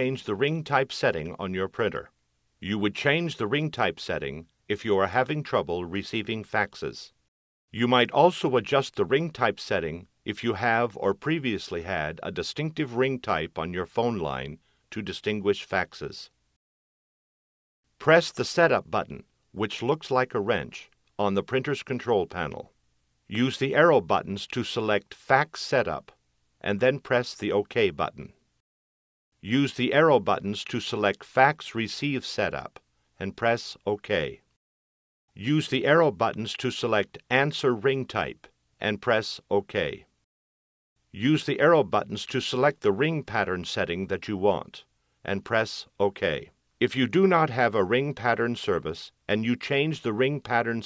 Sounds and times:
Speech: 0.0 - 7.2, 7.8 - 16.4, 18.0 - 22.7, 23.3 - 28.4, 29.4 - 34.5, 35.4 - 40.1, 41.2 - 50.8.

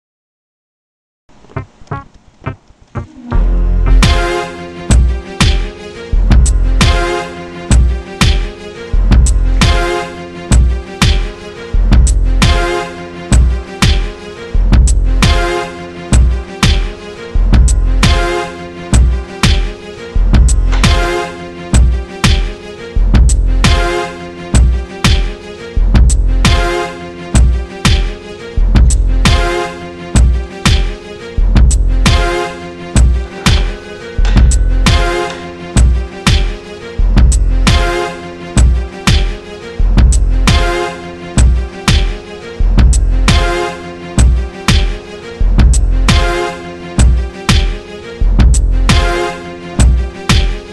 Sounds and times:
Music: 1.3 - 50.7.

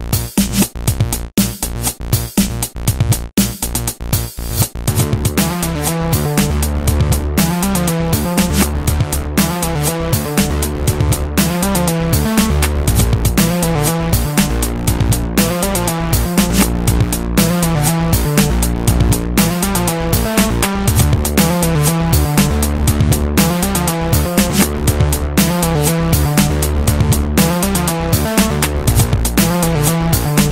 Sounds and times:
Music: 0.0 - 30.5.

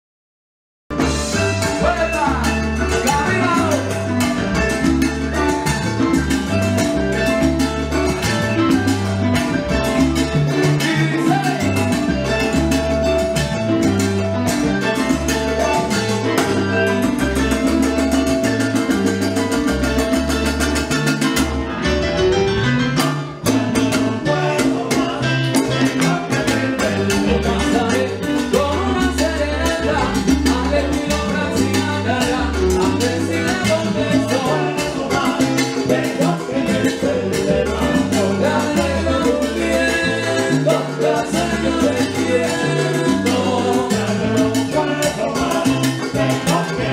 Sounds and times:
Flamenco: 0.9 - 46.9
Salsa music: 0.9 - 46.9.

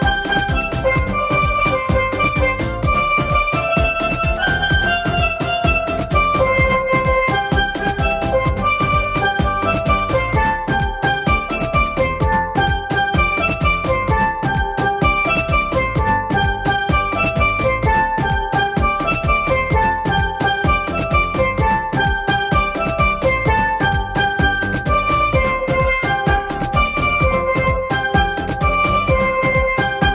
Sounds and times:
Music: 0.0 - 30.1.

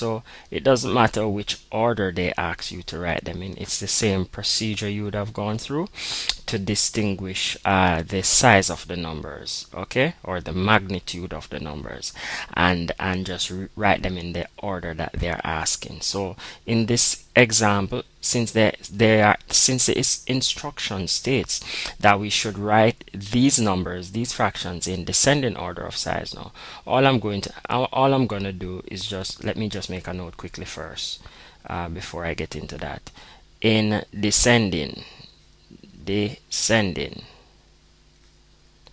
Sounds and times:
Speech: 0.0 - 37.4.

